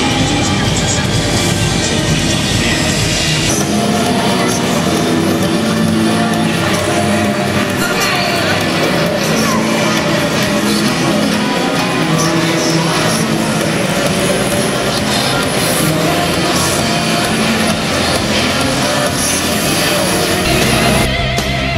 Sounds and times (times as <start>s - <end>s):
Music: 0.0s - 21.7s.